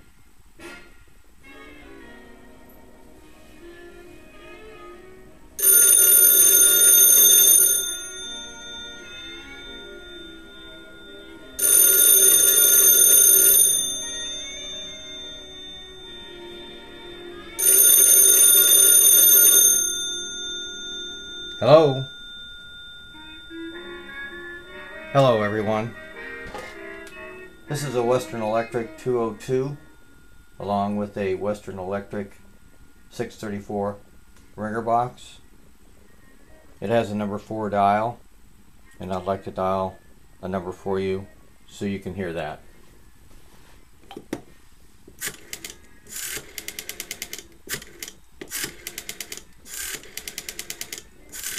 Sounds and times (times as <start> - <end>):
Music: 0.0 - 5.8, 7.8 - 12.2, 13.7 - 17.7, 20.1 - 34.6
Speech: 25.2 - 26.0, 27.7 - 29.8, 30.6 - 32.4, 33.1 - 34.0, 34.6 - 35.4, 36.5 - 38.2, 38.9 - 42.6.